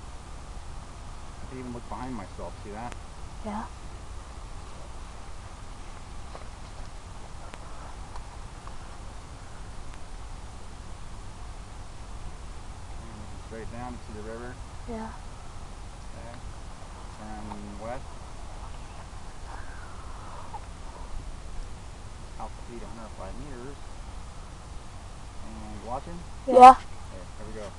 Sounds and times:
Speech: 0:01.5 - 0:03.7, 0:13.0 - 0:15.2, 0:16.2 - 0:16.4, 0:17.2 - 0:18.0, 0:22.4 - 0:23.8, 0:25.5 - 0:27.7.

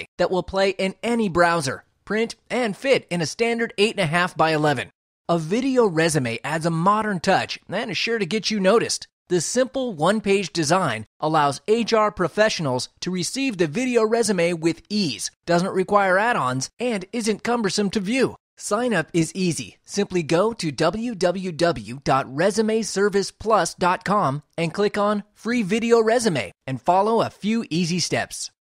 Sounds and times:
Speech: 0:00.0 - 0:28.6.

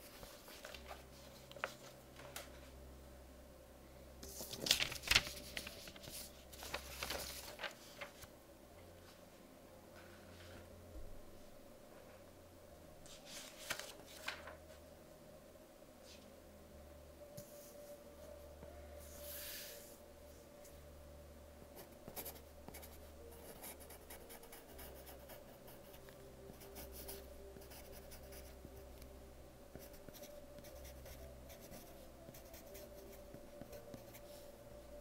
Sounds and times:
Writing: 0:21.8 - 0:28.8, 0:29.7 - 0:34.4.

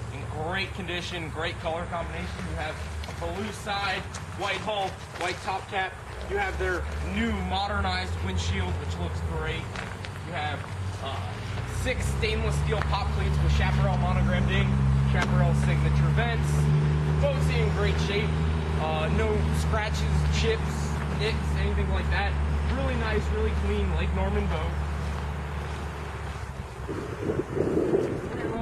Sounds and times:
Speech: 0:00.0 - 0:24.8, 0:28.3 - 0:28.6.

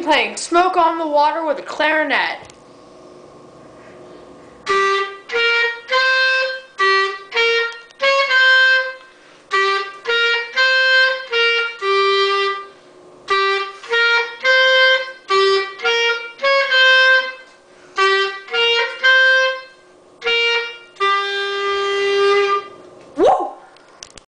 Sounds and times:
Music: 0:04.7 - 0:12.7, 0:13.3 - 0:22.7.

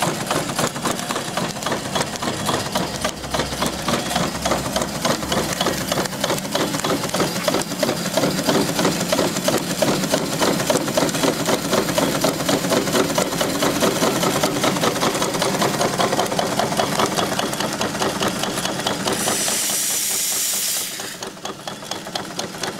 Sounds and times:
Engine: 0:00.0 - 0:22.8
Outside, rural or natural: 0:00.0 - 0:22.8.

